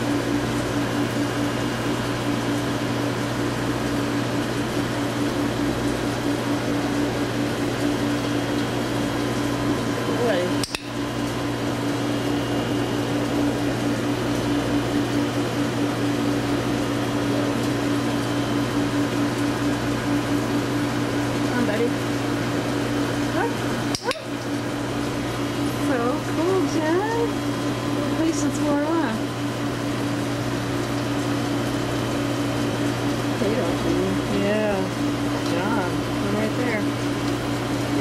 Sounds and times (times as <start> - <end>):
Speech: 10.1 - 10.6, 21.5 - 22.0, 23.3 - 24.2, 25.8 - 27.3, 28.1 - 29.2, 33.4 - 36.9.